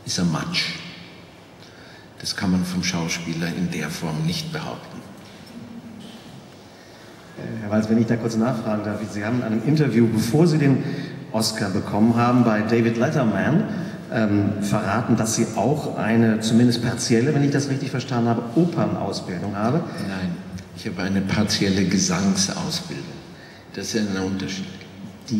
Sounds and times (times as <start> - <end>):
Speech: 0.0 - 0.9, 2.2 - 5.1, 7.4 - 25.4.